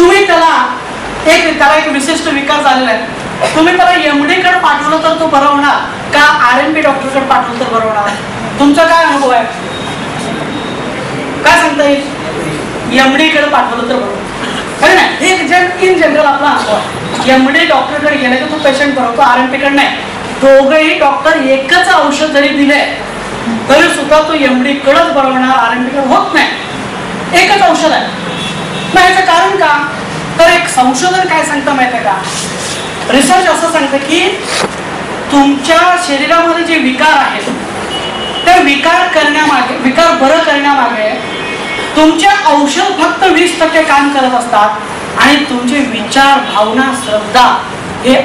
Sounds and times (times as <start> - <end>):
Narration, monologue: 0.0 - 48.2.